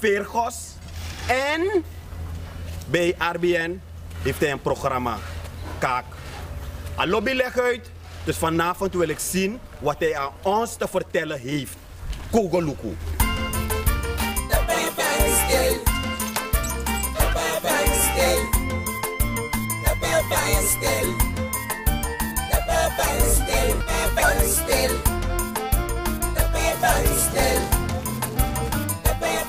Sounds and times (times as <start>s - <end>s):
Music: 13.2s - 29.4s.